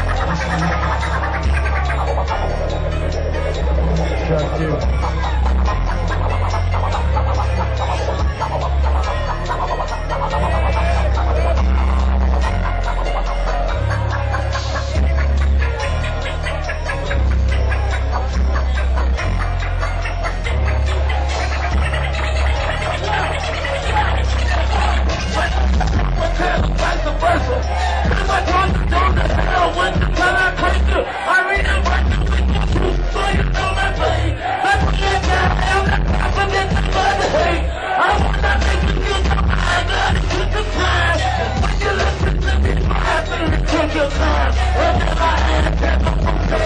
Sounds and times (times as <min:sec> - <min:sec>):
Crowd: 0:00.0 - 0:46.6
Music: 0:00.0 - 0:46.6.